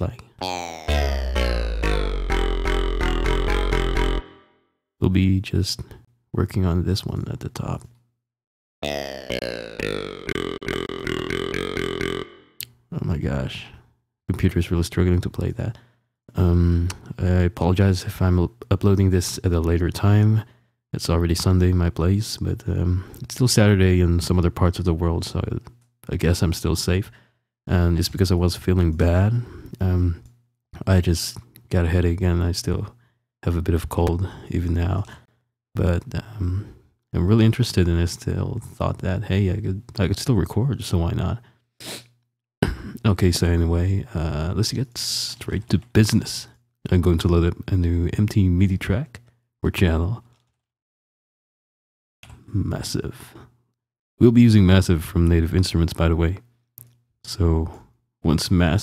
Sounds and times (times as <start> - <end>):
Speech: 0.0 - 0.6, 5.0 - 7.9, 12.9 - 27.1, 27.7 - 30.2, 30.8 - 35.2, 35.8 - 41.4, 42.6 - 50.3, 52.3 - 53.5, 54.2 - 56.5, 57.3 - 58.8.